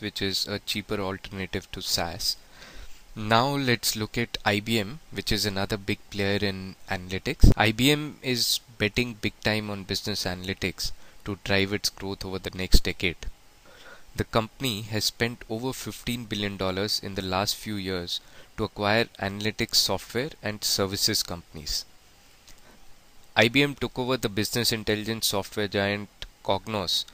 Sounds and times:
Speech: 0:00.0 - 0:02.4, 0:03.2 - 0:13.3, 0:14.2 - 0:21.9, 0:23.4 - 0:27.1.

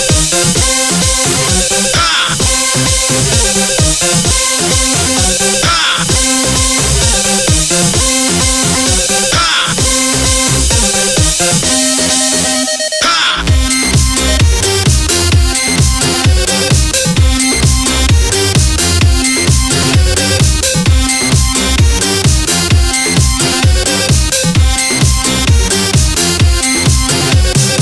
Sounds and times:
Electronic dance music: 0:00.0 - 0:27.8.

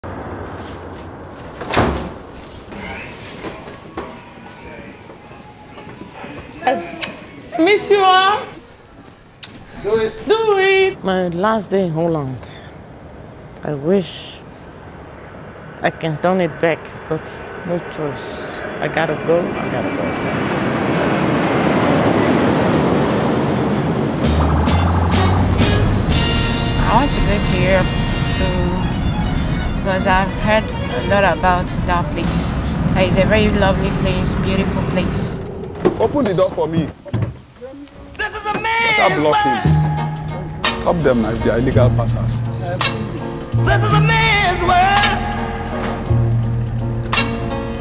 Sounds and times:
Slam: 0:01.6 - 0:02.2.

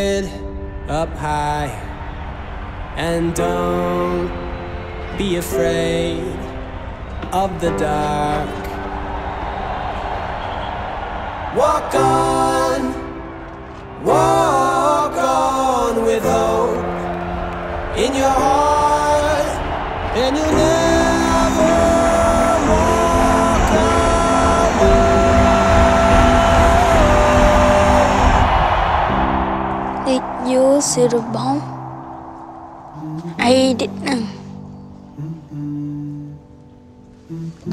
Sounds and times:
Music: 0:00.0 - 0:37.7
Speech: 0:30.1 - 0:31.7, 0:33.4 - 0:34.4.

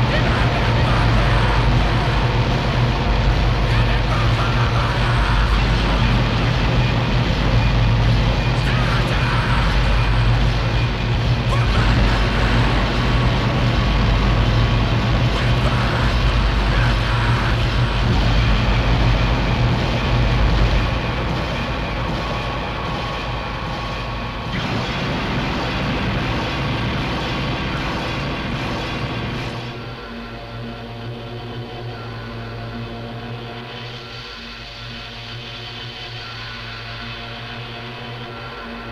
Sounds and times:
Speech: 0:00.0 - 0:02.4, 0:03.6 - 0:06.3, 0:08.6 - 0:10.5, 0:11.4 - 0:13.3, 0:15.3 - 0:18.6
Music: 0:00.0 - 0:38.9.

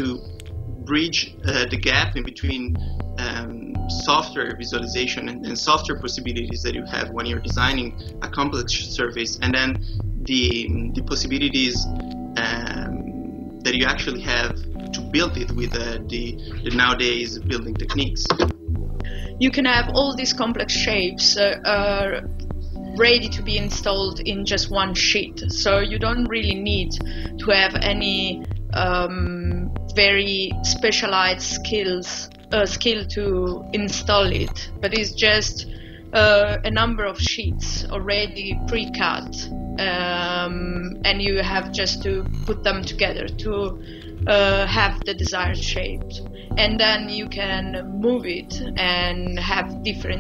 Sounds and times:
Speech: 0:00.0 - 0:00.2, 0:00.8 - 0:18.5, 0:19.1 - 0:22.3, 0:22.9 - 0:50.2
Music: 0:00.0 - 0:50.2.

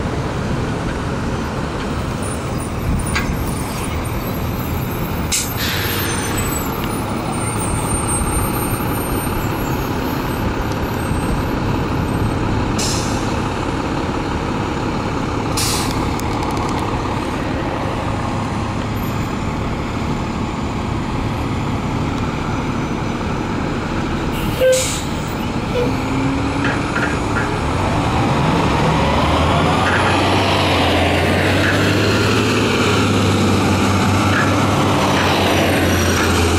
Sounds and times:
Bus: 0:00.0 - 0:36.5
Outside, urban or manmade: 0:00.0 - 0:36.5.

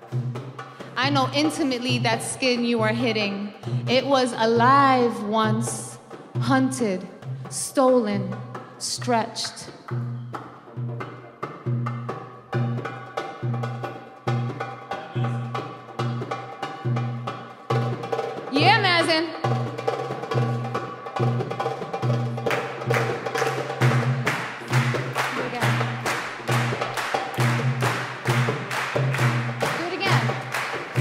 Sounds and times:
Wood block: 0:00.0 - 0:31.0.

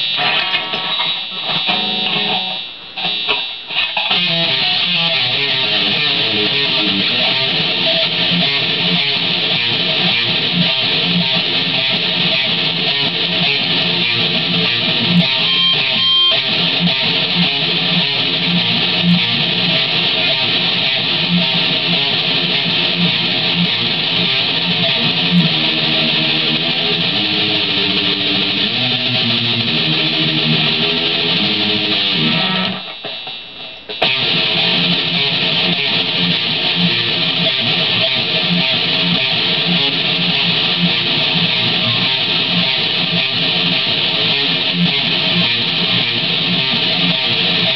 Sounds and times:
Electric guitar: 0:00.0 - 0:47.7.

